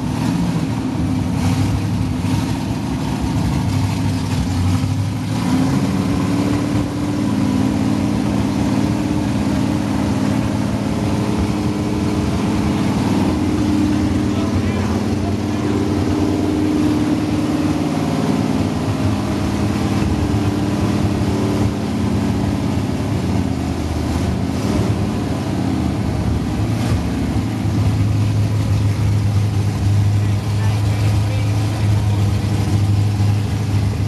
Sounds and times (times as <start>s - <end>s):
Medium engine (mid frequency): 0.0s - 34.0s
Vehicle: 0.0s - 34.0s.